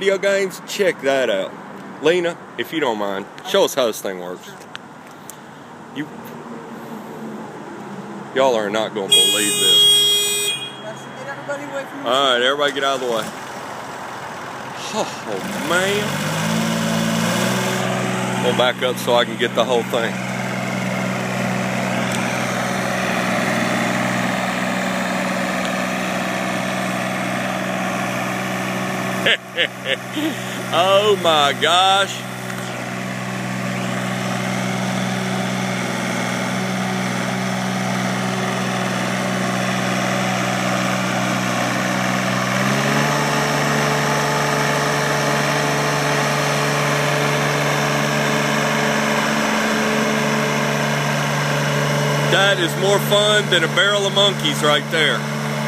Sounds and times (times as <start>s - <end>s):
Speech: 0.0s - 4.6s, 8.4s - 9.5s, 10.9s - 13.3s, 18.4s - 20.1s, 30.7s - 32.2s, 52.3s - 55.2s
Outside, urban or manmade: 0.0s - 55.6s
Vehicle: 0.0s - 55.6s.